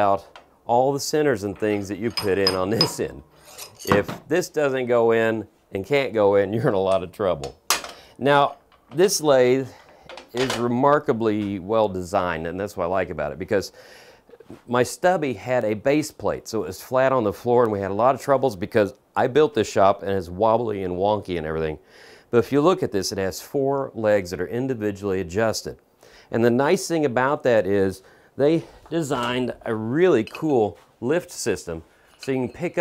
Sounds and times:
Speech: 0:00.0 - 0:03.2, 0:03.9 - 0:07.6, 0:08.2 - 0:13.8, 0:14.4 - 0:32.8
Tools: 0:01.6 - 0:04.2, 0:32.1 - 0:32.8.

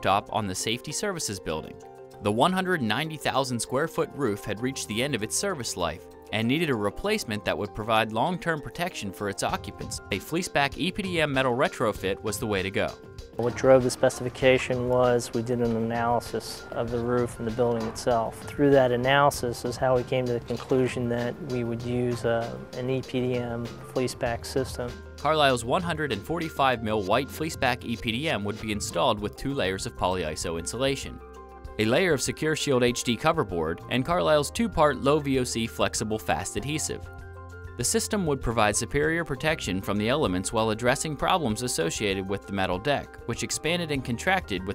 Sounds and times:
Speech: 0:00.0 - 0:31.2, 0:31.8 - 0:37.0, 0:37.8 - 0:44.7
Music: 0:00.0 - 0:44.7.

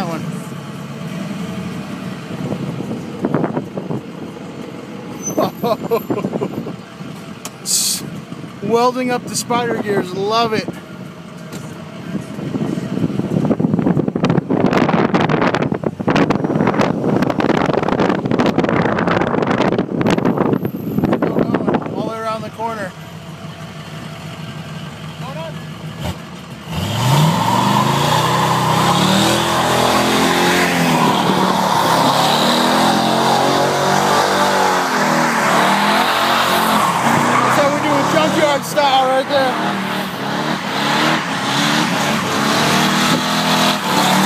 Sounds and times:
Car: 0:00.0 - 0:44.2
Speech: 0:08.6 - 0:10.8, 0:21.3 - 0:23.0, 0:25.2 - 0:25.6, 0:37.5 - 0:39.6.

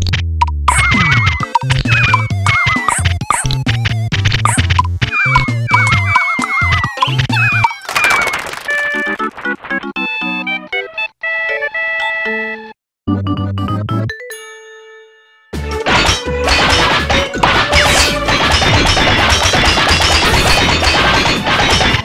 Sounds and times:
Music: 0:08.7 - 0:22.0.

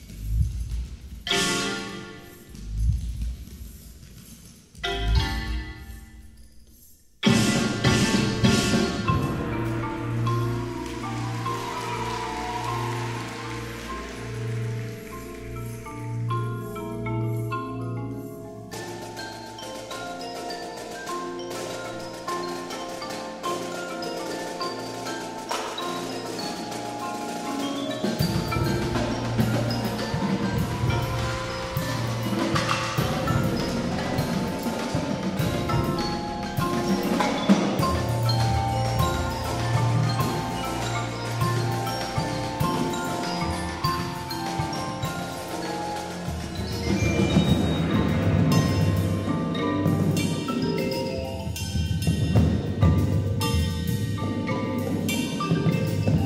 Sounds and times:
Percussion: 0:00.0 - 0:56.2.

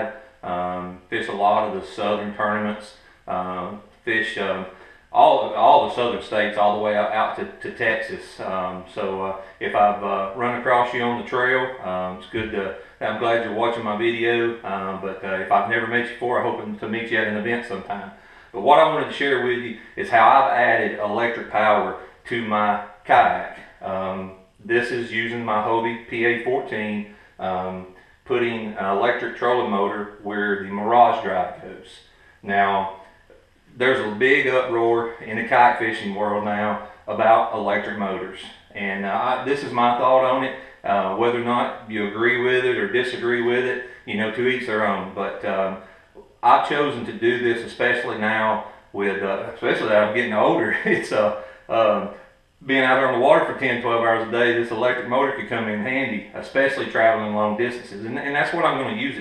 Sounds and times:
Speech: 0:00.0 - 0:33.1, 0:33.7 - 0:59.2.

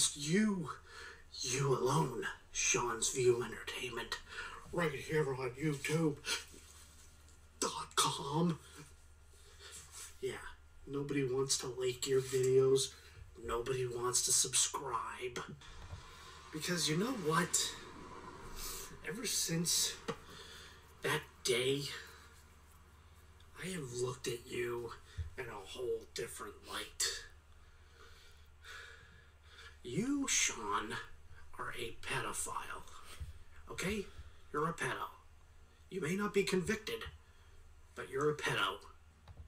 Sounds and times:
Speech: 0:00.0 - 0:06.6, 0:07.6 - 0:08.9, 0:10.2 - 0:15.6, 0:16.5 - 0:17.9, 0:18.8 - 0:20.2, 0:21.0 - 0:22.2, 0:23.5 - 0:27.4, 0:29.8 - 0:35.3, 0:35.9 - 0:37.2, 0:38.0 - 0:39.0
Inside, small room: 0:00.0 - 0:39.4.

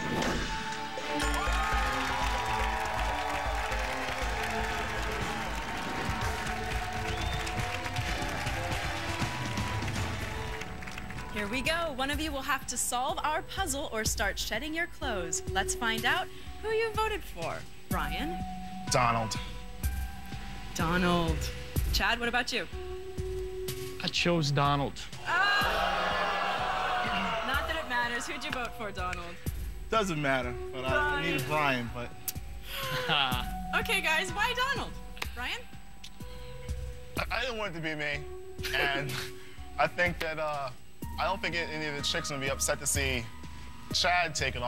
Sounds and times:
Music: 0:00.0 - 0:44.6.

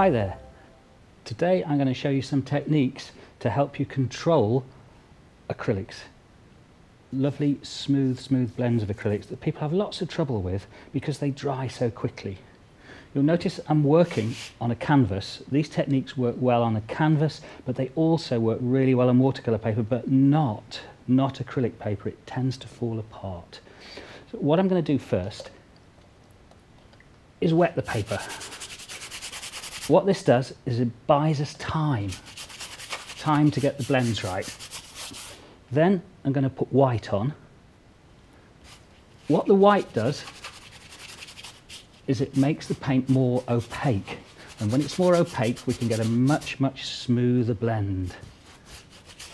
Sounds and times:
Speech: 0:00.0 - 0:00.4, 0:01.2 - 0:04.7, 0:05.5 - 0:06.2, 0:07.1 - 0:12.4, 0:13.2 - 0:23.6, 0:24.3 - 0:25.6, 0:27.4 - 0:28.4, 0:29.9 - 0:32.2, 0:33.2 - 0:34.5, 0:35.7 - 0:37.5, 0:39.3 - 0:40.3, 0:42.1 - 0:48.3.

